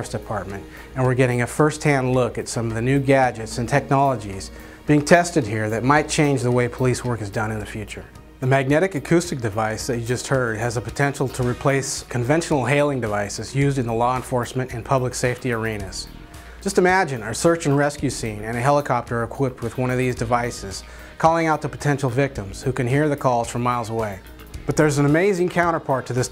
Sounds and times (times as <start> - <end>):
Music: 0.0 - 26.3
Speech: 0.0 - 26.3.